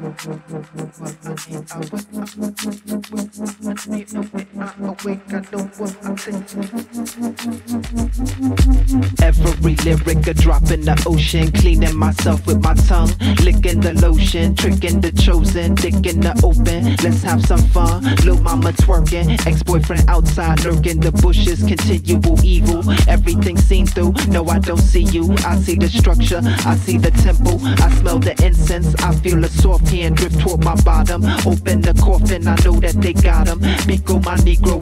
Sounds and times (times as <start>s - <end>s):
Music: 0.0s - 34.8s.